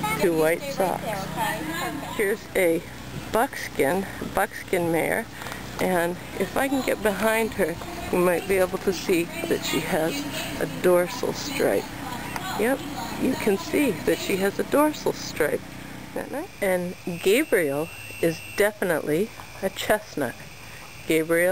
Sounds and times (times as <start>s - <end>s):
Speech: 5.8s - 15.6s.